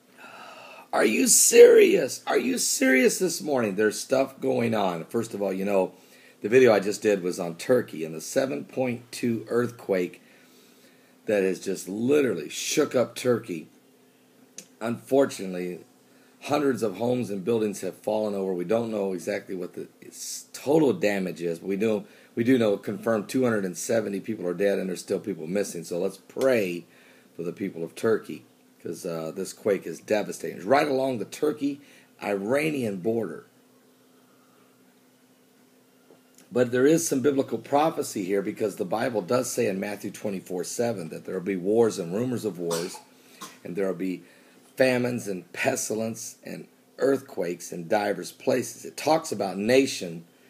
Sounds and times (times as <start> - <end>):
Speech: 0.9 - 10.2, 11.3 - 13.8, 14.6 - 15.8, 16.4 - 33.5, 36.5 - 44.2, 44.8 - 50.3.